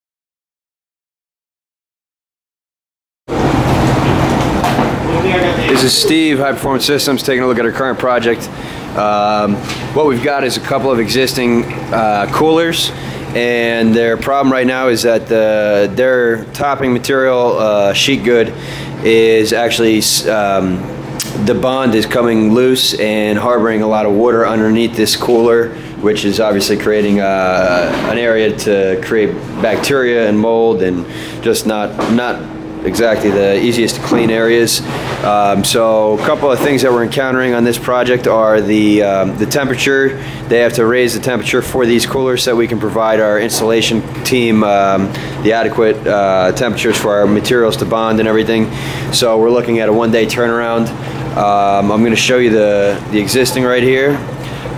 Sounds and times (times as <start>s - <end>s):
Speech: 5.0s - 54.3s.